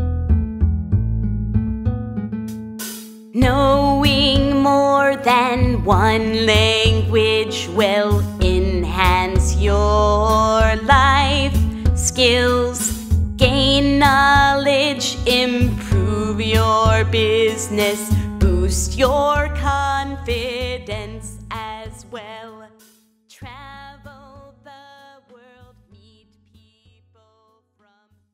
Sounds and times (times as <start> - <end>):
Music: 0.0 - 28.3
Female singing: 3.4 - 28.2.